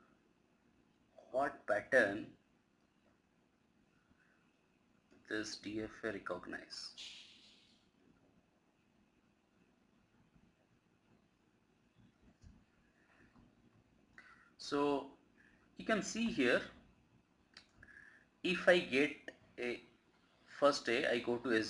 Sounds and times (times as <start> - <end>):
Speech: 1.2 - 2.4, 5.3 - 7.1, 14.6 - 15.2, 15.8 - 16.8, 18.4 - 19.9, 20.5 - 21.7.